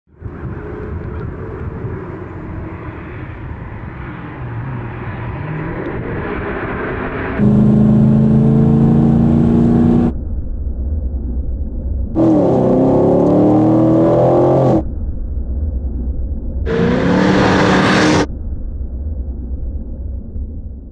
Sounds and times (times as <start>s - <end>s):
Car: 0.1s - 20.9s
Outside, rural or natural: 0.1s - 20.9s.